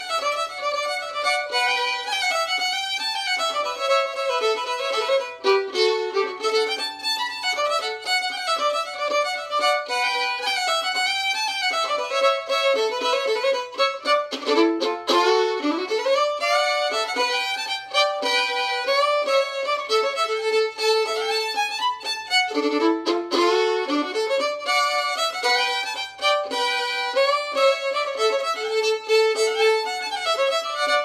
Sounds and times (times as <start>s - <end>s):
Violin, fiddle: 0.0s - 31.0s.